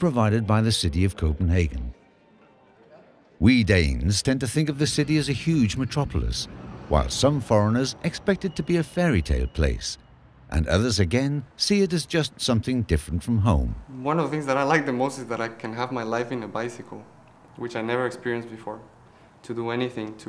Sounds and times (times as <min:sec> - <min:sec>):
Speech: 0:00.0 - 0:02.0, 0:02.9 - 0:20.2.